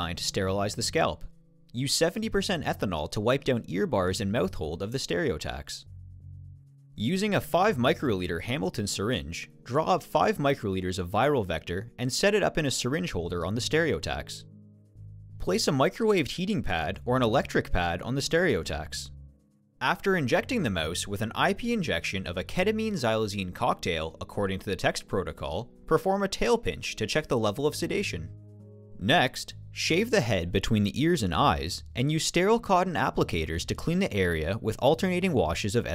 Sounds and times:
Speech: 0:00.0 - 0:05.9, 0:07.0 - 0:14.5, 0:15.4 - 0:19.2, 0:19.8 - 0:28.3, 0:29.0 - 0:35.9.

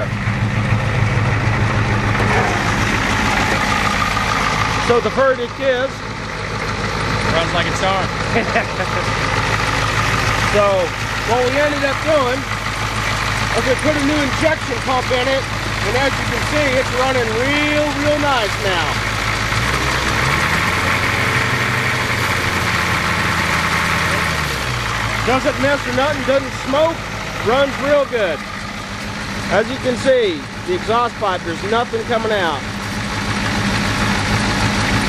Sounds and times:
Engine: 0:00.0 - 0:35.0
Truck: 0:00.0 - 0:35.0
Speech: 0:04.8 - 0:06.0, 0:07.3 - 0:08.1, 0:10.5 - 0:12.5, 0:13.5 - 0:19.0, 0:25.2 - 0:28.4, 0:29.5 - 0:32.7.

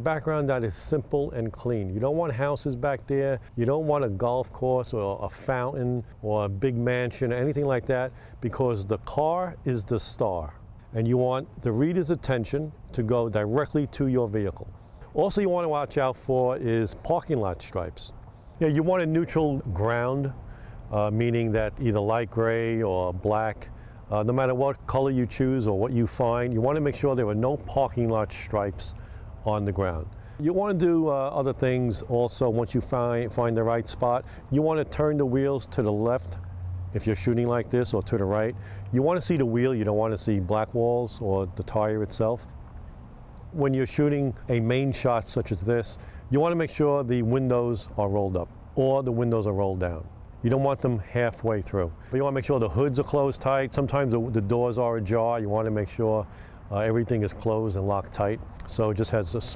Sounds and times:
Speech: 0:00.0 - 0:42.5, 0:43.5 - 0:59.5.

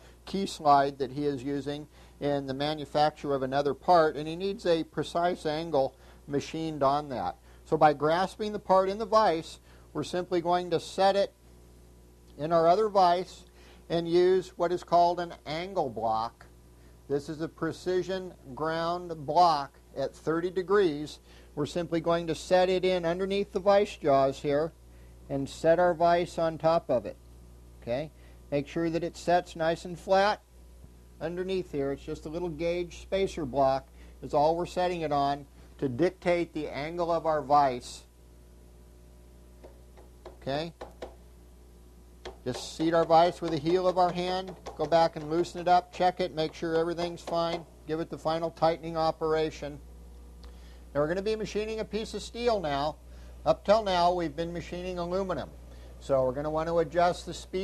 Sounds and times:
Speech: 0:00.3 - 0:11.4, 0:12.4 - 0:16.5, 0:17.1 - 0:27.2, 0:27.8 - 0:30.4, 0:31.2 - 0:38.1, 0:40.4 - 0:40.8, 0:42.5 - 0:49.8, 0:50.9 - 0:57.6.

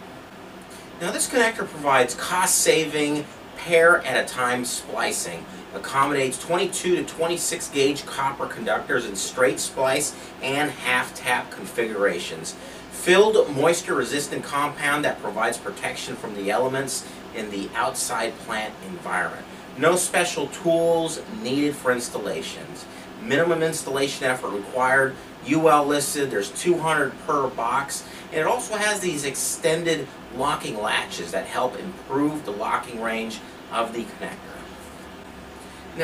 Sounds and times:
Speech: 0:01.0 - 0:34.8.

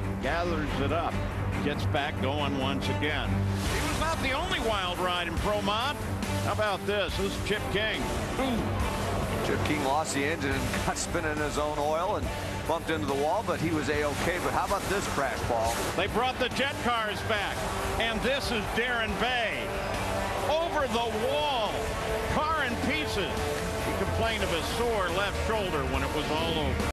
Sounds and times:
Music: 0:00.0 - 0:26.9
Speech: 0:00.2 - 0:08.6, 0:09.4 - 0:19.6, 0:20.5 - 0:23.3, 0:23.9 - 0:26.9.

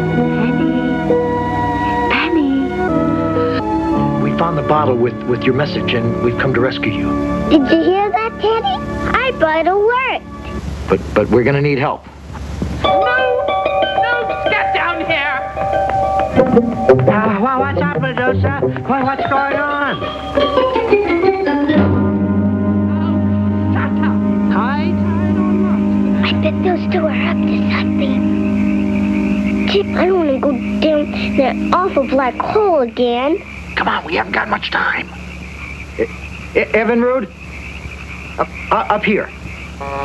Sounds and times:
Music: 0:00.0 - 0:11.5, 0:12.8 - 0:33.8.

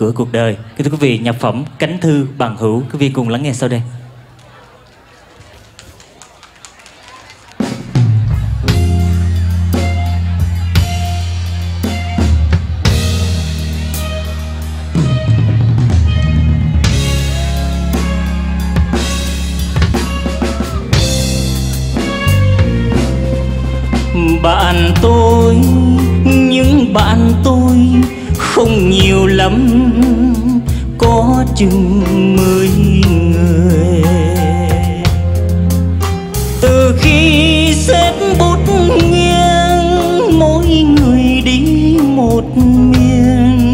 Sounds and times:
Music: 0:07.1 - 0:43.7.

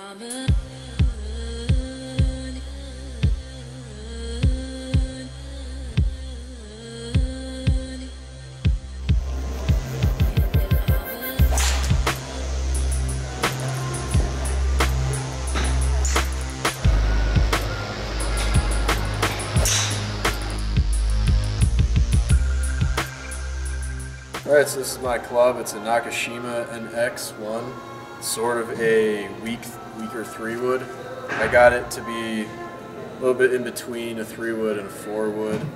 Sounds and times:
Music: 0:00.0 - 0:35.7.

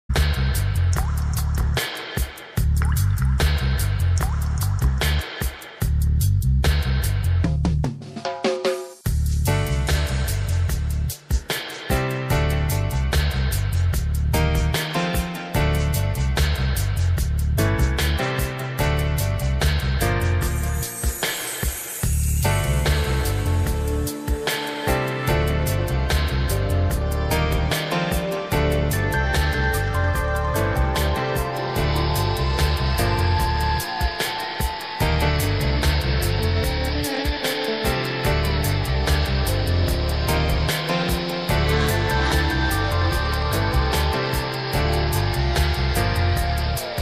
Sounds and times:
Music: 0:00.0 - 0:47.0.

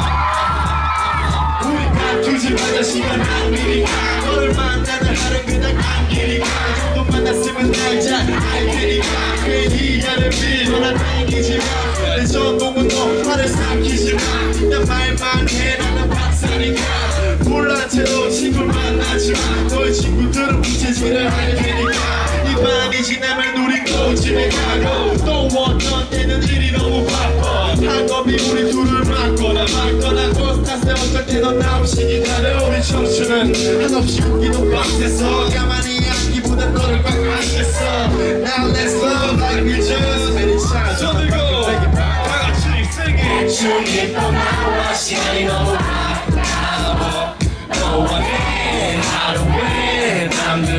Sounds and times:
Rhythm and blues: 0:00.0 - 0:50.7.

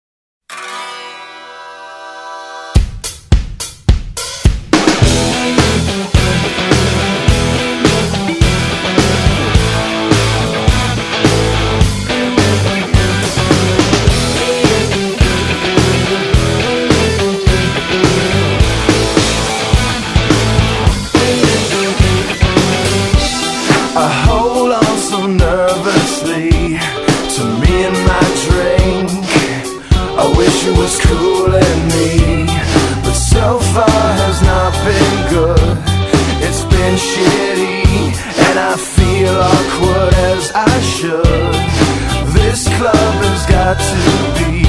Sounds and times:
Zither: 0:00.5 - 0:01.9.

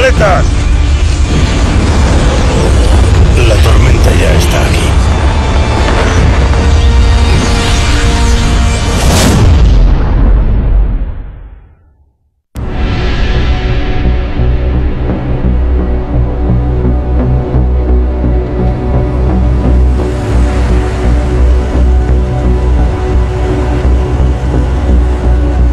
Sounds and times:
Speech: 0:00.0 - 0:00.5, 0:03.4 - 0:05.0.

